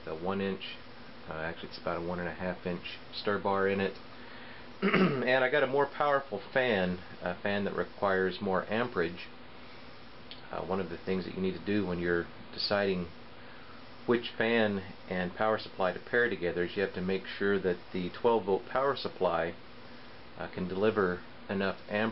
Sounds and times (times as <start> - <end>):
Speech: 0.0 - 4.0, 5.0 - 9.4, 10.3 - 13.2, 14.0 - 19.6, 20.4 - 22.1.